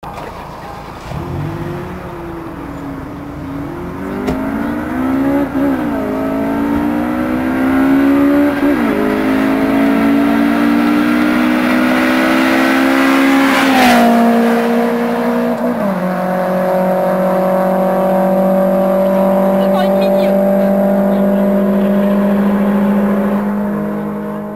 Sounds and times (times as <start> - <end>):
Race car, auto racing: 0.0 - 24.5.